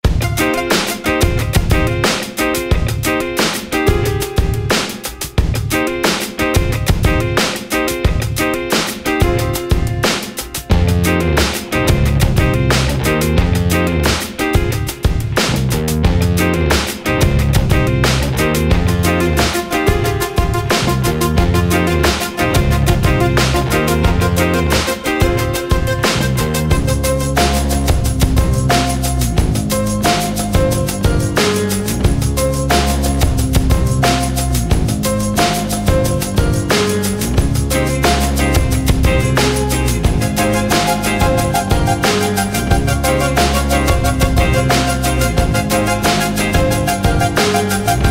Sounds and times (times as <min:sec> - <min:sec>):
Music: 0:00.0 - 0:48.1.